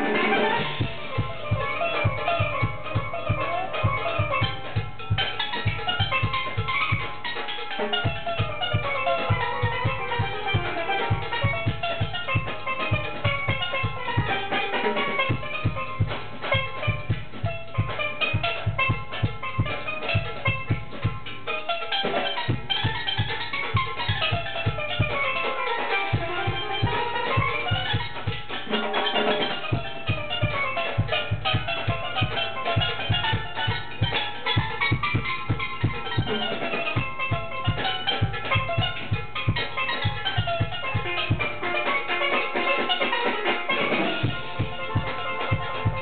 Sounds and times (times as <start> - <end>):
Steelpan: 0.0 - 46.0.